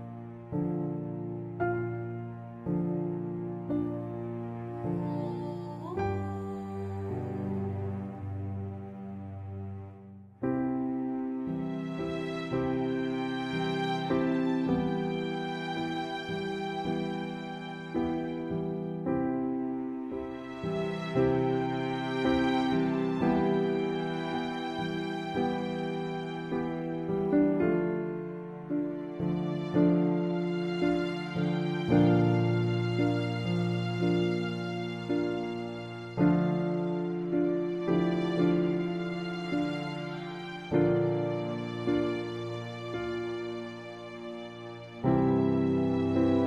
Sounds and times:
Sad music: 0.0 - 46.4.

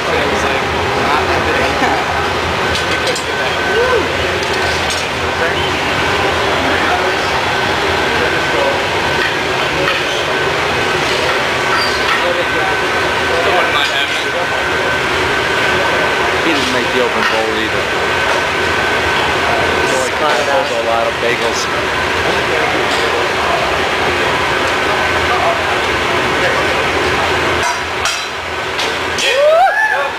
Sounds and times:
Speech: 9.6 - 14.9, 15.7 - 18.0, 19.3 - 27.6.

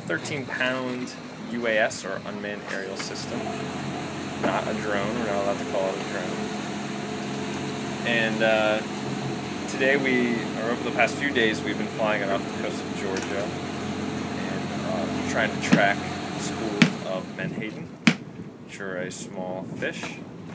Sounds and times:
Speech: 0.0 - 3.6, 4.4 - 6.5, 8.1 - 8.9, 9.7 - 13.6, 14.4 - 17.9, 18.7 - 20.2
Boat, Water vehicle: 0.0 - 20.5
Outside, rural or natural: 0.0 - 20.5.

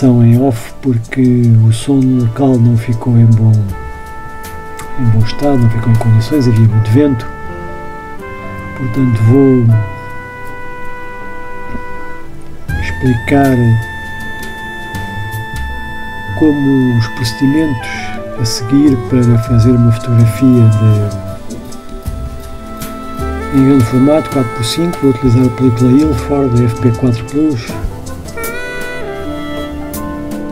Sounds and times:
Speech: 0.0 - 3.8, 5.0 - 7.3, 8.8 - 9.8, 12.8 - 13.9, 16.3 - 21.3, 23.5 - 27.9
Music: 0.0 - 30.5.

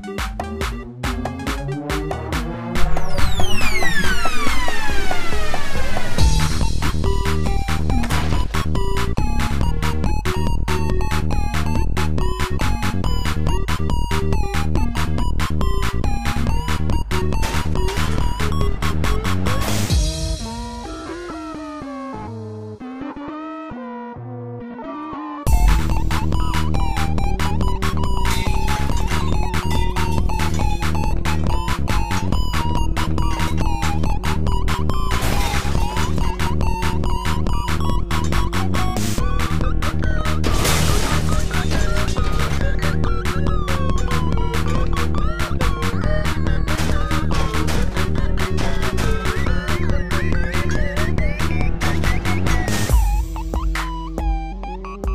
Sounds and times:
Music: 0.0 - 55.1.

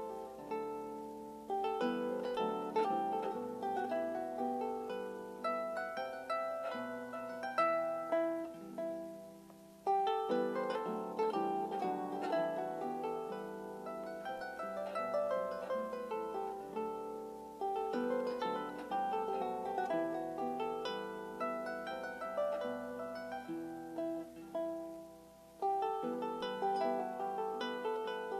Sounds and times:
Harp: 0.0 - 28.4.

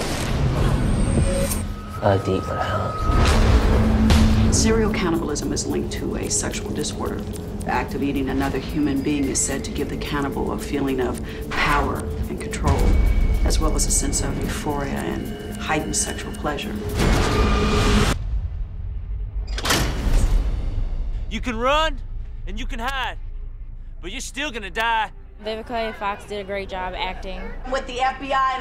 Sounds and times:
Music: 0.9 - 18.5.

